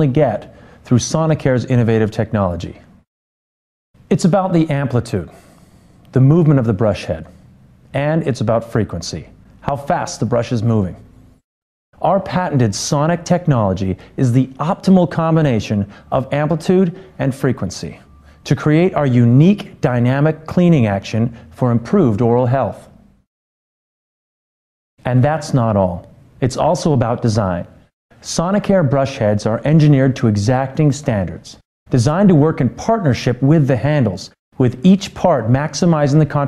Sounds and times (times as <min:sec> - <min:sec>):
Speech: 0:00.0 - 0:02.9, 0:04.1 - 0:05.4, 0:06.1 - 0:07.3, 0:07.9 - 0:11.1, 0:12.0 - 0:23.0, 0:25.0 - 0:36.4.